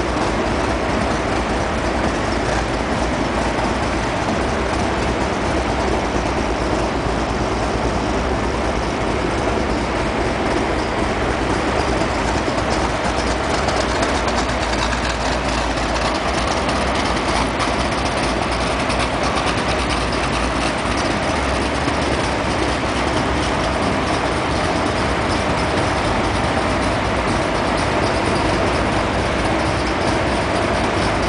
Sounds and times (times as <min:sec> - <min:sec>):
Car: 0:00.0 - 0:31.2.